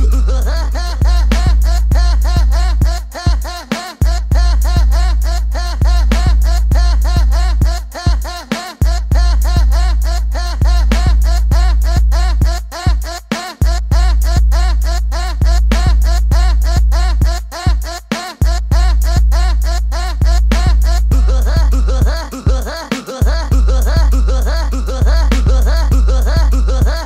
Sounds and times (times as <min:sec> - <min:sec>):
Music: 0:00.0 - 0:27.0.